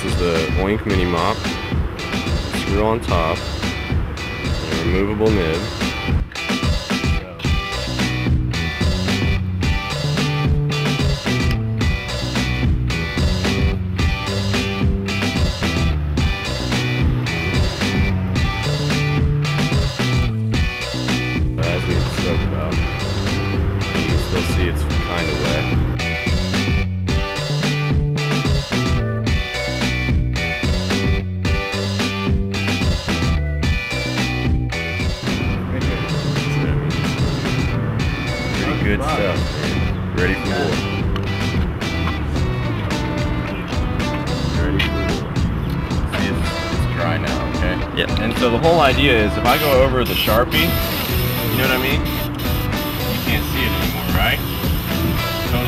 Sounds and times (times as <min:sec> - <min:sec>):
Speech: 0:00.0 - 0:01.5, 0:02.5 - 0:03.5, 0:04.6 - 0:05.7, 0:07.2 - 0:07.6, 0:21.6 - 0:22.8, 0:24.0 - 0:25.8, 0:35.7 - 0:36.8, 0:38.5 - 0:40.8, 0:44.5 - 0:45.2, 0:46.1 - 0:50.8, 0:51.4 - 0:52.0, 0:53.2 - 0:54.4
Music: 0:00.0 - 0:55.6.